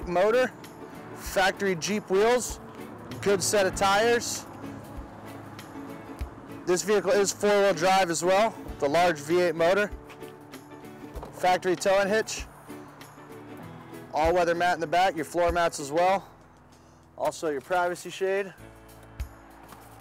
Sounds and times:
Speech: 0:00.0 - 0:00.5, 0:01.2 - 0:02.6, 0:03.2 - 0:04.5, 0:06.7 - 0:09.9, 0:11.4 - 0:12.5, 0:14.2 - 0:16.3, 0:17.2 - 0:18.6
Music: 0:00.0 - 0:20.0.

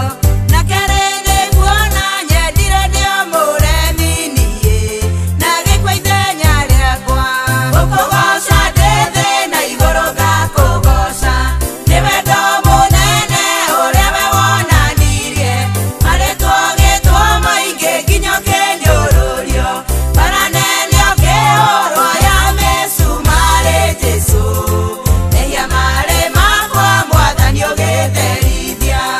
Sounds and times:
Gospel music: 0:00.0 - 0:29.1.

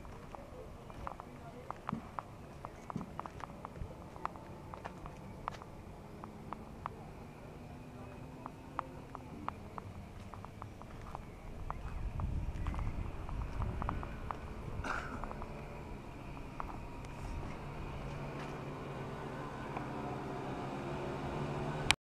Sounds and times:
Vehicle: 0:00.0 - 0:22.0.

